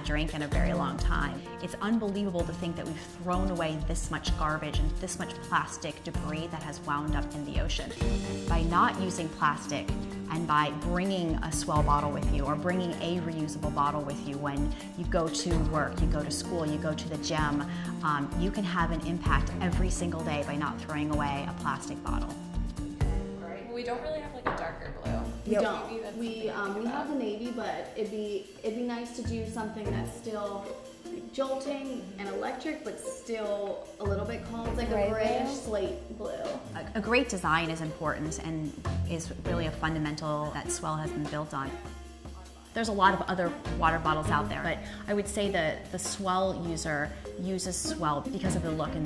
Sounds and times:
Music: 0.0s - 49.0s.

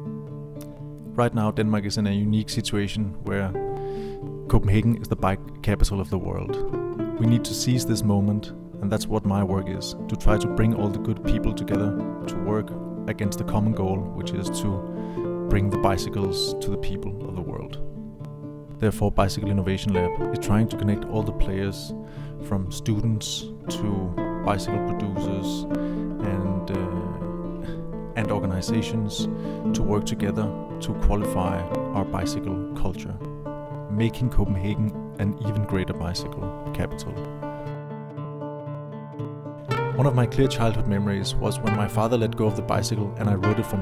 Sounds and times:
Music: 0.0s - 43.8s
Speech: 1.2s - 3.6s, 4.5s - 14.8s, 15.5s - 17.8s, 18.8s - 27.3s, 28.2s - 33.3s, 33.9s - 37.3s, 40.0s - 43.8s.

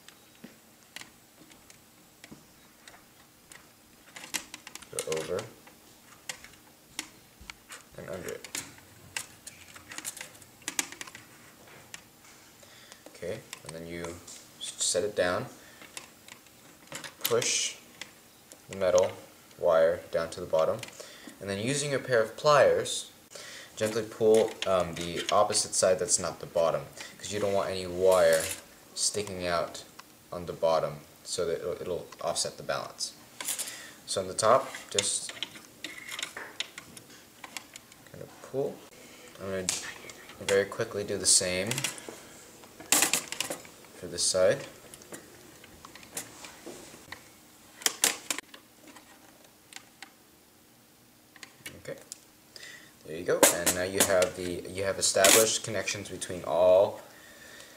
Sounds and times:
Speech: 4.9s - 5.6s, 8.0s - 8.5s, 13.2s - 15.5s, 17.2s - 17.8s, 18.7s - 23.1s, 23.8s - 33.2s, 34.1s - 35.4s, 39.4s - 41.9s, 44.0s - 44.7s, 51.7s - 52.1s, 53.0s - 57.0s.

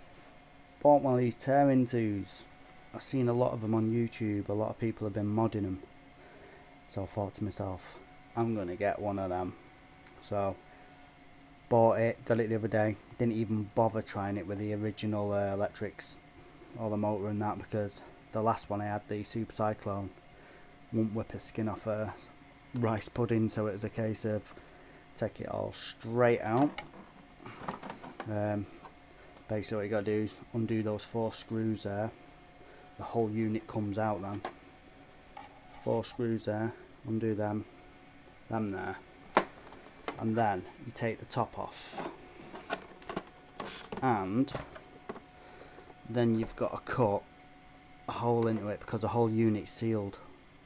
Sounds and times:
Speech: 0.8s - 5.9s, 6.9s - 10.6s, 11.7s - 16.2s, 16.8s - 20.2s, 20.9s - 24.5s, 25.2s - 26.8s, 28.2s - 28.7s, 29.5s - 32.2s, 33.0s - 34.5s, 35.8s - 37.7s, 38.5s - 39.0s, 40.2s - 42.1s, 43.9s - 44.7s, 46.1s - 47.2s, 48.1s - 50.3s.

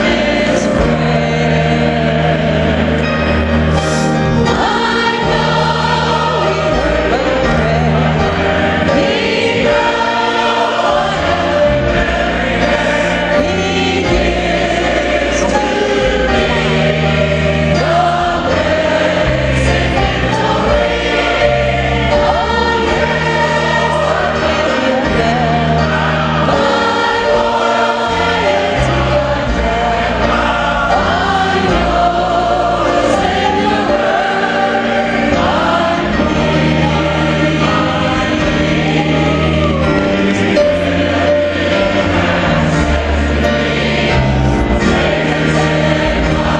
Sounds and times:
Choir: 0.0s - 46.5s.

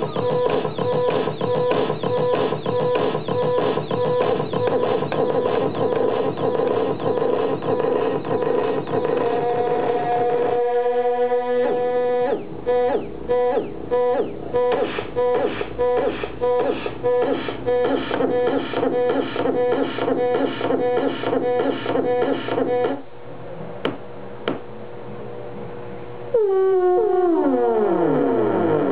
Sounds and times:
Music: 0.0s - 23.0s.

